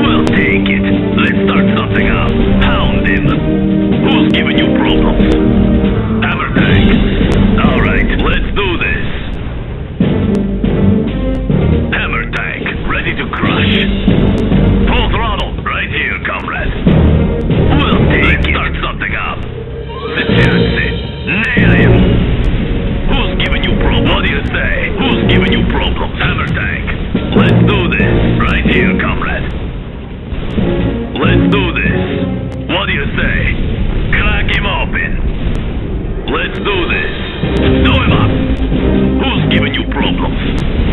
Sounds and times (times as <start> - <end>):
Speech: 0.0 - 3.4, 4.0 - 5.4, 6.2 - 7.0, 7.6 - 9.2, 11.9 - 14.0, 14.9 - 16.8, 17.7 - 19.4, 20.1 - 22.0, 23.1 - 29.5, 31.2 - 32.0, 32.7 - 35.2, 36.3 - 37.2, 37.8 - 38.4, 39.2 - 40.4
Music: 0.0 - 40.9.